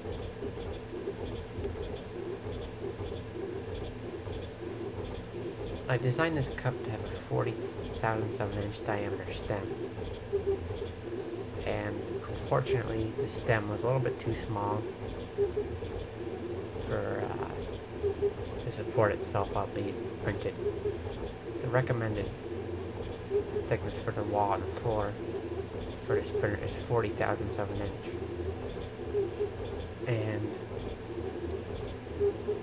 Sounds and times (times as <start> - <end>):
Speech: 5.9 - 9.7, 11.7 - 14.9, 16.9 - 17.6, 18.7 - 20.6, 21.7 - 22.3, 23.7 - 25.2, 26.1 - 28.2, 30.1 - 30.6.